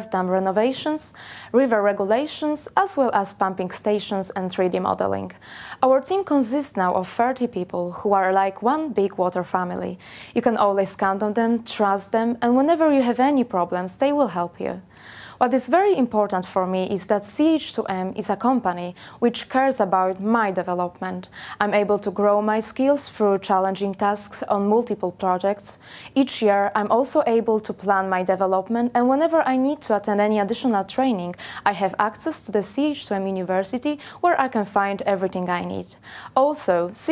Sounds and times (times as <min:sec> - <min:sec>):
Speech: 0:00.0 - 0:14.8, 0:15.4 - 0:37.1.